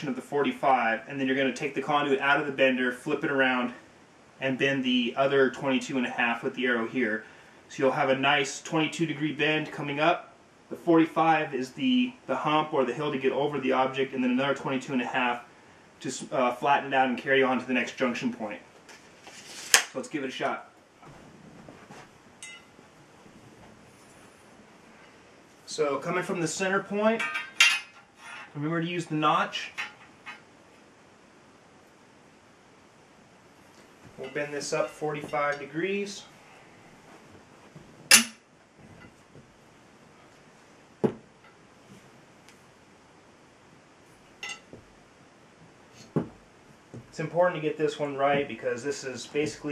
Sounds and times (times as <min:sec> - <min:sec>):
Speech: 0:00.0 - 0:03.8, 0:04.4 - 0:18.7, 0:19.9 - 0:20.7, 0:25.7 - 0:27.3, 0:28.6 - 0:29.8, 0:34.2 - 0:36.4, 0:47.1 - 0:49.7.